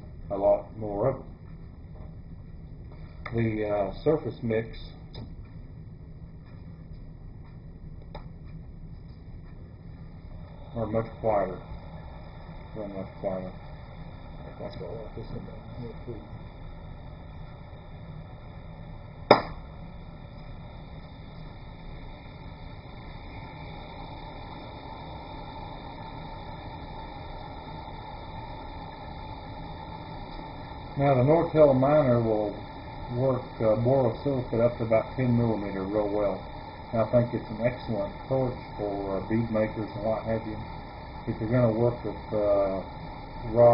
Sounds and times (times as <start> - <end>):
Speech: 0.3 - 1.3, 3.3 - 5.0, 10.8 - 11.7, 12.8 - 13.6, 14.5 - 16.3, 31.0 - 36.4, 37.0 - 40.6, 41.3 - 42.9, 43.5 - 43.7.